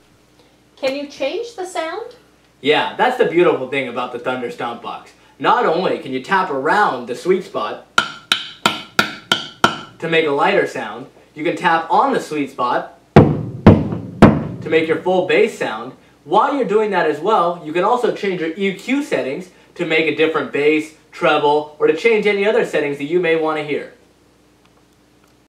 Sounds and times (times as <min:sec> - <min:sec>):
Speech: 0:00.8 - 0:07.9, 0:10.0 - 0:13.0, 0:14.7 - 0:24.0.